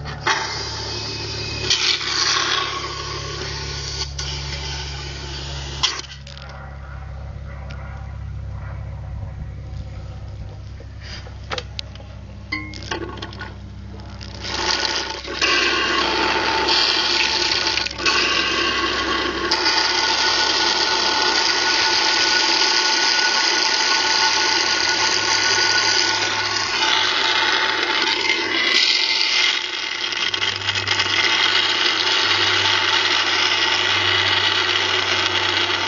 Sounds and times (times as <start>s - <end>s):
Pump (liquid): 0.0s - 6.4s, 14.1s - 35.8s.